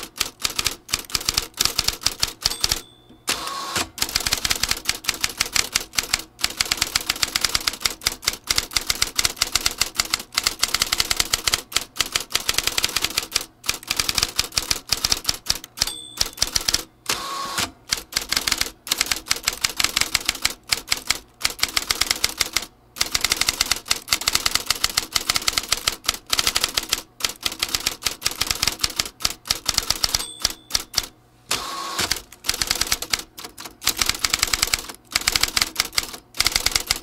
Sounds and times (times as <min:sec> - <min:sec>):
Ding: 0:02.5 - 0:03.4, 0:15.8 - 0:16.7, 0:30.1 - 0:31.0.